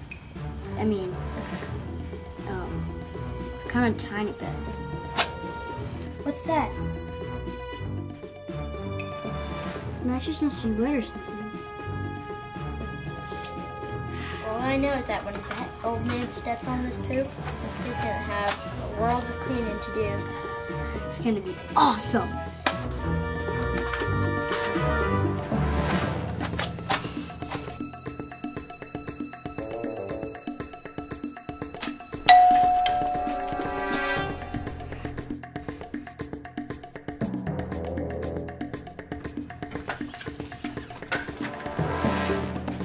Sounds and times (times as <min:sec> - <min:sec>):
Music: 0:00.0 - 0:42.8.